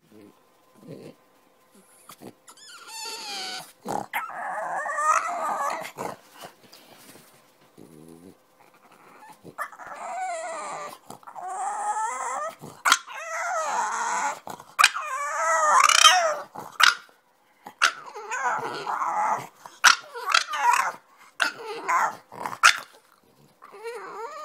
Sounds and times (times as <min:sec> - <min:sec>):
Dog: 0:07.7 - 0:17.1.